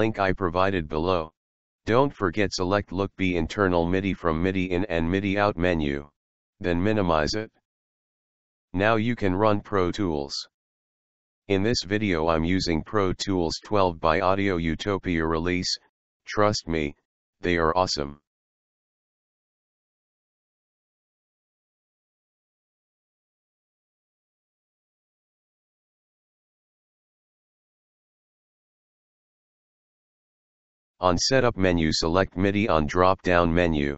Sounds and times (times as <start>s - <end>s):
Speech: 0.0s - 7.6s, 8.8s - 10.5s, 11.5s - 18.3s, 31.0s - 33.9s.